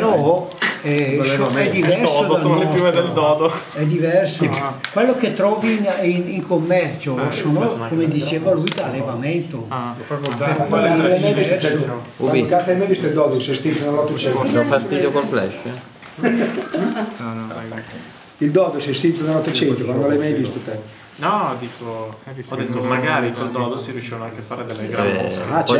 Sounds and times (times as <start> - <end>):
Conversation: 0.0 - 25.8.